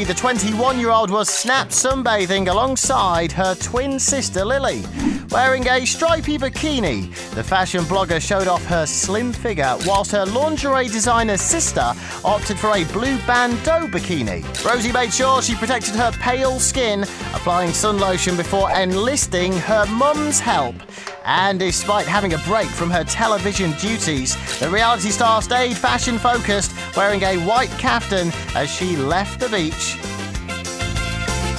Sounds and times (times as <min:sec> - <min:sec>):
Speech: 0:00.0 - 0:30.0
Music: 0:00.0 - 0:31.5.